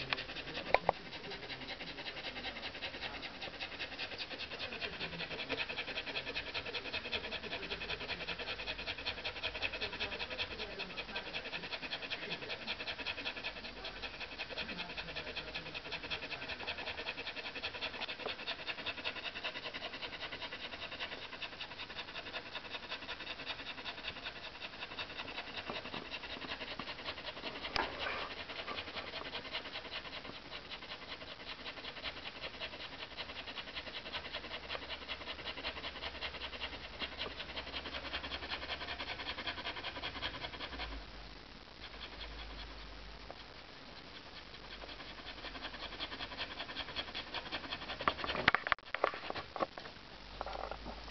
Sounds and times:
Domestic animals, pets: 0.0 - 41.0, 41.7 - 49.5.

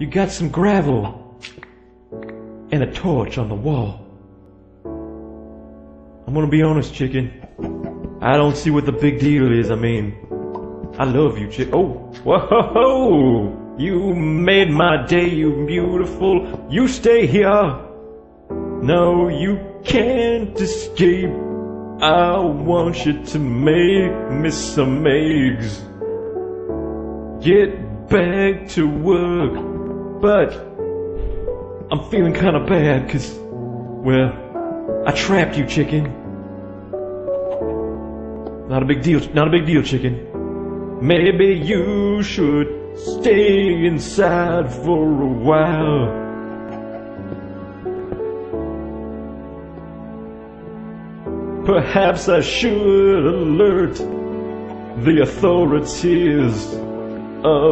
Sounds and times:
Speech: 0.0 - 1.2, 2.7 - 4.1, 6.3 - 7.6, 8.2 - 10.3, 11.0 - 17.8, 22.0 - 25.8, 30.2 - 30.7, 31.9 - 33.4, 34.0 - 34.4, 35.1 - 36.2, 38.7 - 40.3
Music: 0.0 - 57.7.

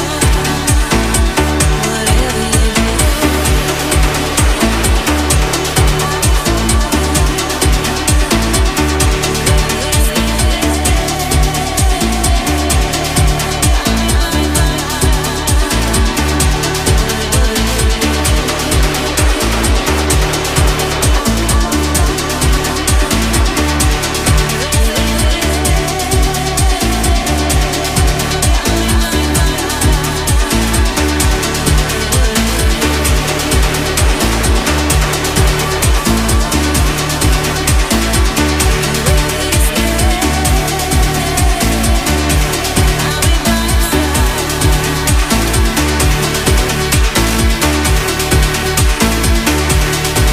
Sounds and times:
Disco: 0.0 - 50.3.

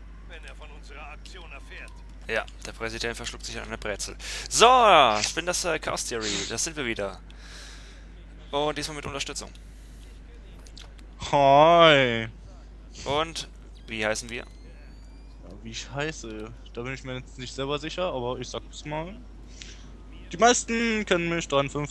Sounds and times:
Speech: 0.3 - 7.2, 8.5 - 9.5, 20.1 - 21.9.

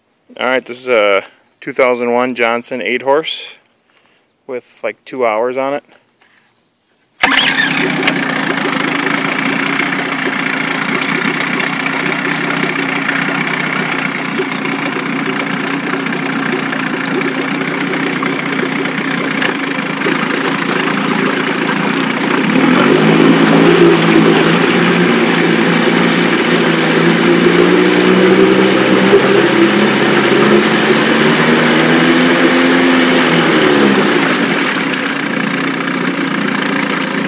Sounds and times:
Outside, urban or manmade: 0.0 - 37.2
Engine: 7.2 - 37.2.

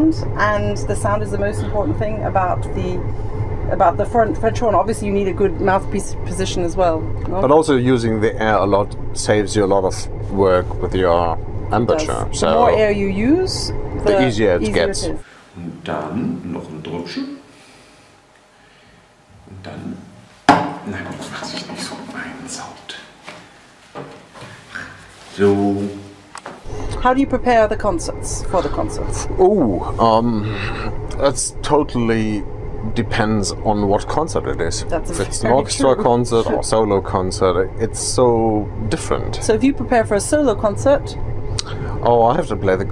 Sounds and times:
Speech: 0.0 - 3.0, 3.7 - 17.4, 19.5 - 20.1, 20.9 - 23.1, 24.8 - 26.1, 26.9 - 42.9.

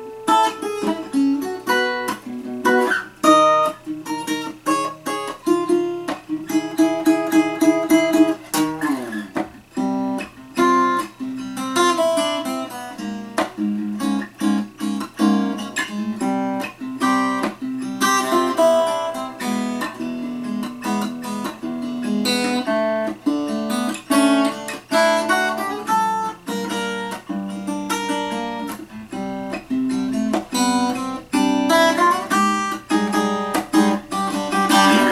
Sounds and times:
Strum: 0.0 - 35.1.

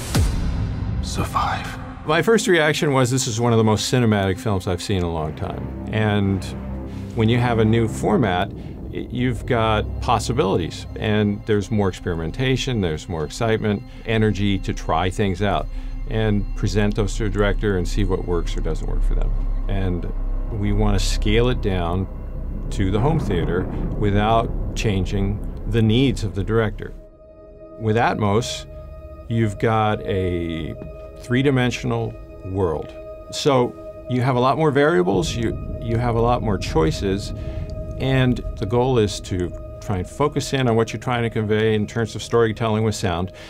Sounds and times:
Speech: 1.0 - 6.6, 7.2 - 22.1, 22.7 - 27.0, 27.8 - 28.6, 29.3 - 37.3, 38.0 - 43.4.

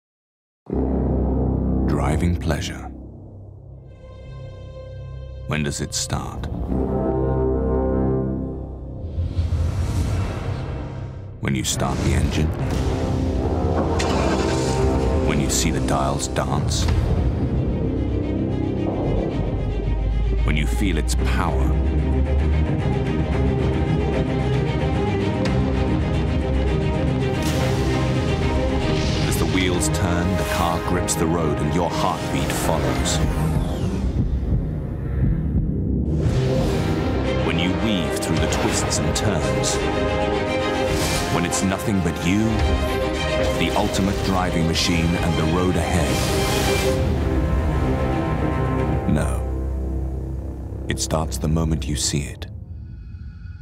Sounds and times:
Music: 0.7 - 53.6
Speech: 1.9 - 3.0, 5.5 - 6.5, 11.4 - 12.6, 15.2 - 16.9, 20.4 - 21.8, 29.3 - 33.2, 37.4 - 39.8, 41.3 - 42.7, 43.6 - 46.2, 49.0 - 49.5, 50.9 - 52.5.

